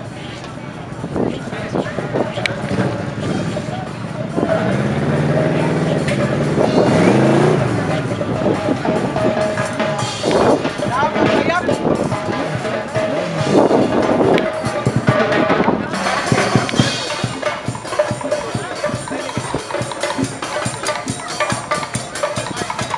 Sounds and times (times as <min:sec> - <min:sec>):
Speech: 0:00.0 - 0:09.8, 0:10.7 - 0:13.4, 0:14.2 - 0:22.9
Music: 0:00.0 - 0:22.9.